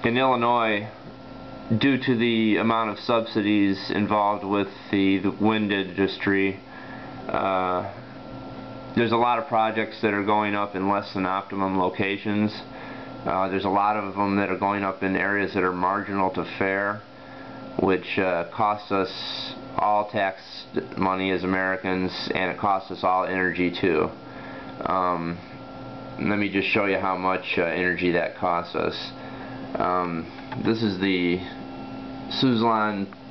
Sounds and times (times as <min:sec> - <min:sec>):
Speech: 0:00.0 - 0:01.0, 0:01.7 - 0:06.6, 0:07.3 - 0:08.0, 0:09.0 - 0:17.1, 0:17.8 - 0:24.2, 0:24.8 - 0:25.5, 0:26.2 - 0:31.6, 0:32.3 - 0:33.3.